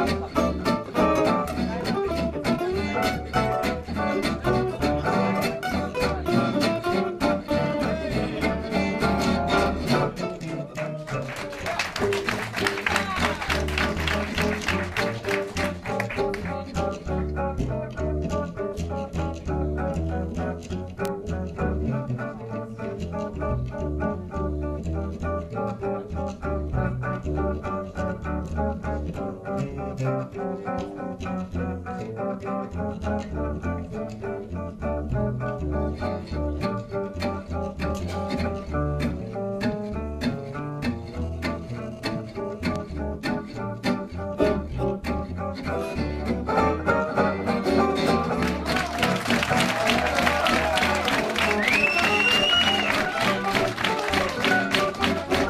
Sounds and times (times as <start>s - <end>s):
Acoustic guitar: 0.0s - 55.5s
String section: 0.0s - 55.5s
Speech: 1.4s - 3.0s, 7.5s - 8.8s.